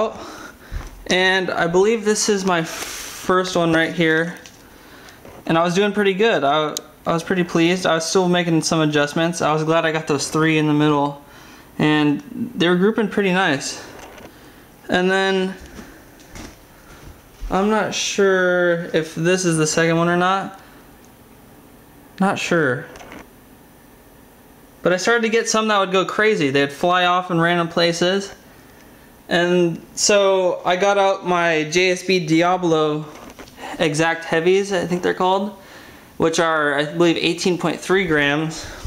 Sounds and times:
Speech: 0.0 - 0.3, 1.0 - 4.5, 5.5 - 11.2, 11.8 - 13.9, 14.9 - 15.7, 17.4 - 20.6, 22.2 - 23.0, 24.8 - 28.4, 29.3 - 35.6, 36.2 - 38.8.

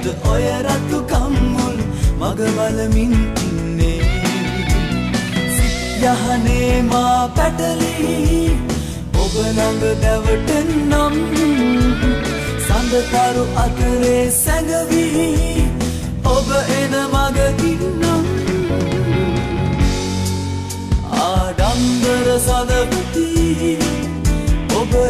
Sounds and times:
Singing: 0.0 - 4.0, 21.0 - 24.1, 24.7 - 25.1
Music: 0.0 - 25.1.

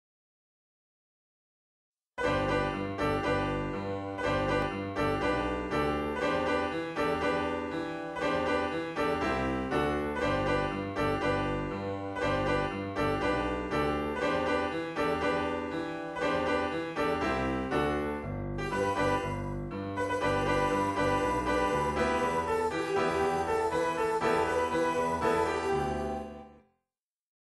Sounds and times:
Music: 2.2 - 26.9.

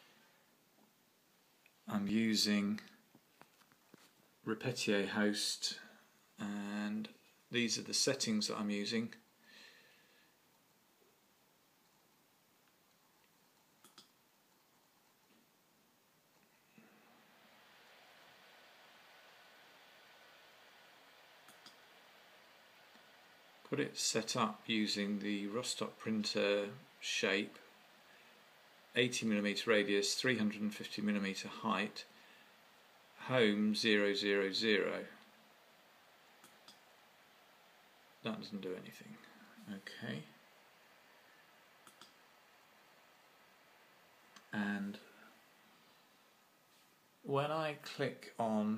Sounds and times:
Speech: 1.8 - 3.0, 4.5 - 9.2, 23.7 - 27.6, 29.0 - 32.1, 33.2 - 35.2, 38.2 - 40.4, 44.5 - 45.2, 47.2 - 48.7.

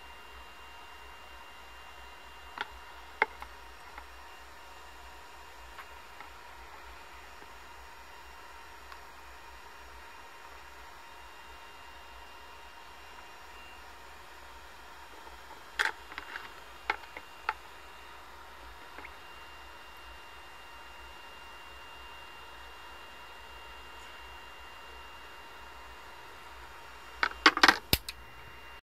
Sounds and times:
Inside, small room: 0.0 - 28.8.

